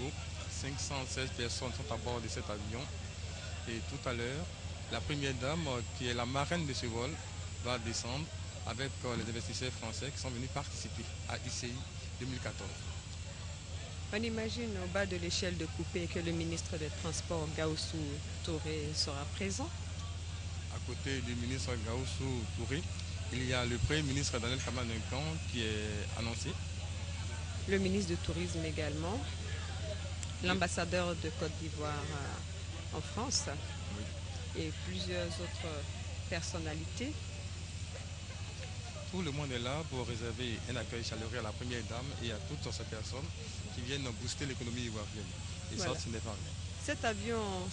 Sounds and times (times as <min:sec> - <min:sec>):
Speech: 0:00.0 - 0:13.0, 0:14.2 - 0:19.8, 0:20.7 - 0:37.2, 0:39.1 - 0:47.7.